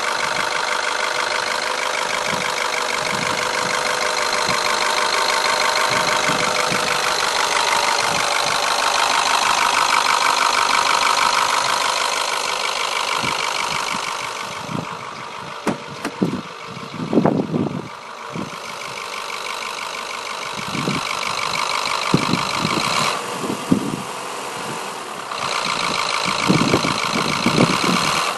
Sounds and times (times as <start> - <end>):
Idling: 0.0 - 28.3
Medium engine (mid frequency): 0.0 - 28.3
Vehicle: 0.0 - 28.3.